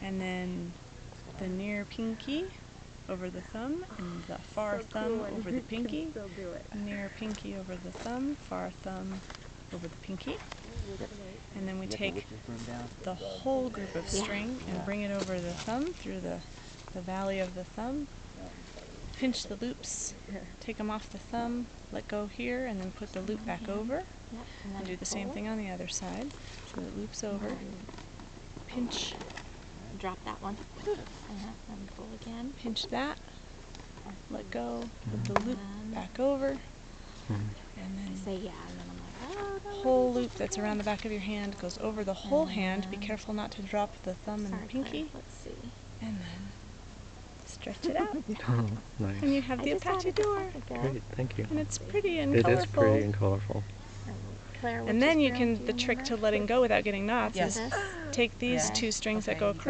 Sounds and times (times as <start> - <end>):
Speech: 1.4 - 9.2, 9.8 - 27.9, 28.7 - 29.2, 34.1 - 36.6, 37.3 - 46.4, 47.5 - 59.7.